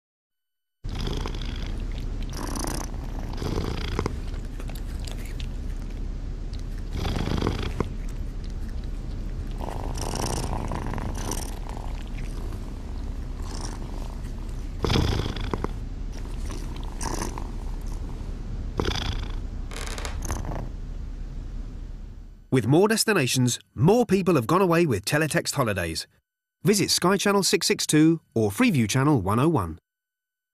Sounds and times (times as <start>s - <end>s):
Speech: 22.6s - 29.8s.